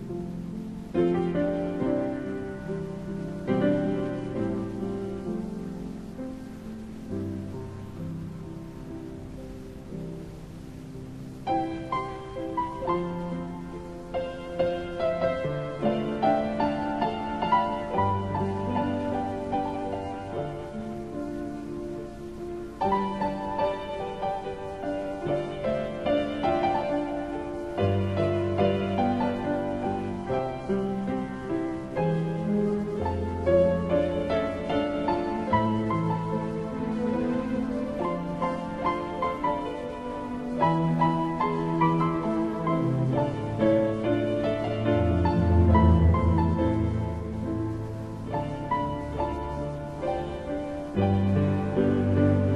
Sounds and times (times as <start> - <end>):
Music: 0.0 - 52.5.